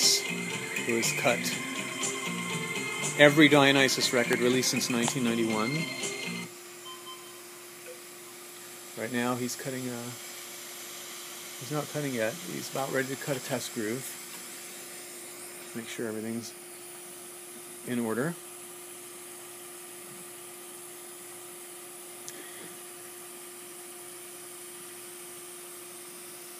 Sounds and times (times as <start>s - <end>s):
Speech: 0.9s - 1.6s, 3.2s - 5.8s, 9.0s - 10.2s, 11.6s - 14.2s, 15.7s - 16.6s, 17.8s - 18.4s.